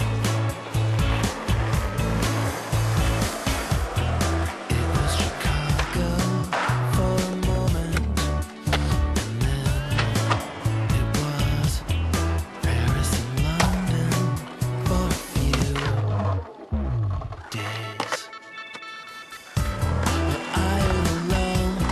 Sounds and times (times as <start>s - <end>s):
Skateboard: 0.0s - 11.8s, 12.6s - 21.9s.